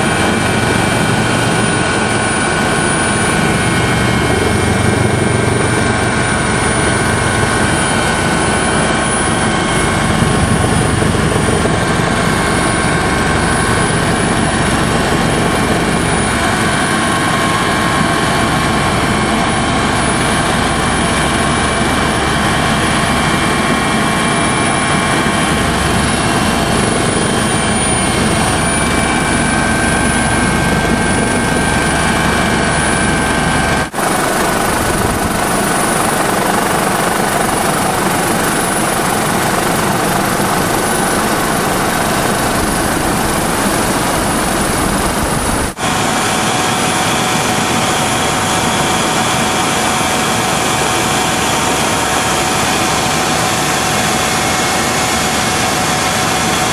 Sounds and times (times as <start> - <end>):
Outside, urban or manmade: 0.0 - 56.7.